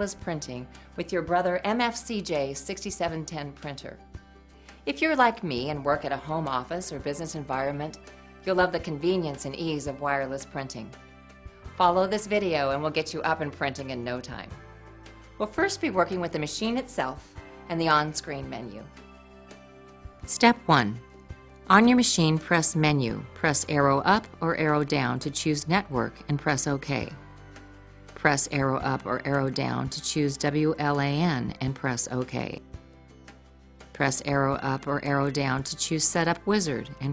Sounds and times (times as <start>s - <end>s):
Speech: 0.0s - 4.0s, 4.9s - 10.9s, 11.8s - 14.5s, 15.4s - 18.9s, 20.3s - 21.0s, 21.7s - 27.2s, 28.2s - 32.6s, 34.0s - 37.1s
Music: 0.0s - 37.1s.